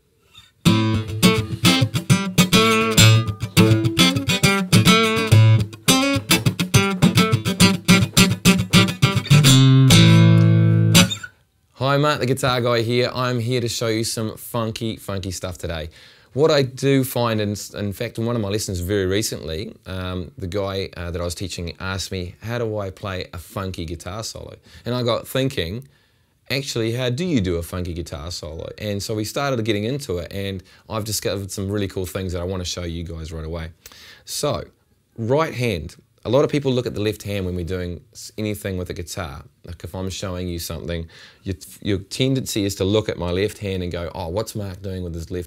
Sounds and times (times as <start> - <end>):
Speech: 11.8 - 25.9, 26.5 - 45.4.